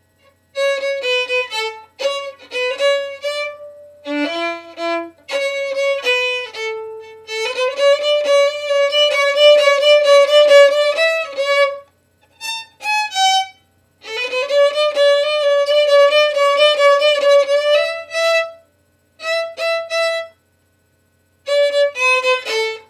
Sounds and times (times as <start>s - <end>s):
Violin, fiddle: 0.6s - 11.8s, 12.4s - 18.6s, 21.5s - 22.8s.